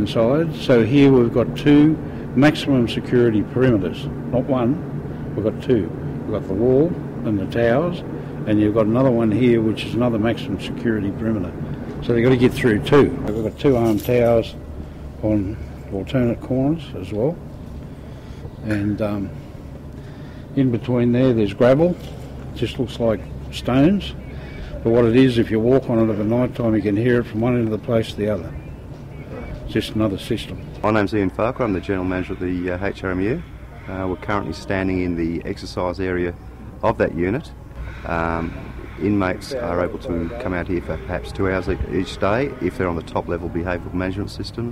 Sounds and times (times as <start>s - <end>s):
Speech: 0.0s - 4.8s, 5.4s - 14.6s, 18.6s - 19.4s, 20.6s - 22.0s, 22.6s - 24.2s, 24.8s - 28.6s, 29.3s - 44.7s.